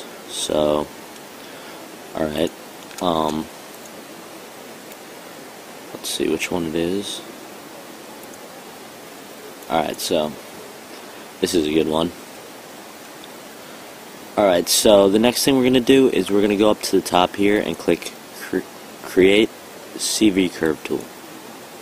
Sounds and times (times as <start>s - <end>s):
Speech: 0.3s - 0.9s, 2.1s - 3.5s, 6.0s - 7.3s, 9.7s - 10.4s, 11.4s - 12.2s, 14.4s - 21.1s.